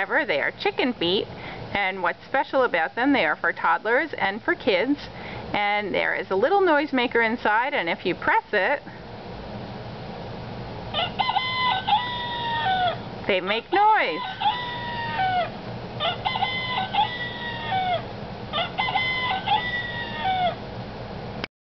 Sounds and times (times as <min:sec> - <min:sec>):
Crowing, cock-a-doodle-doo: 0:10.9 - 0:13.0, 0:14.1 - 0:20.6.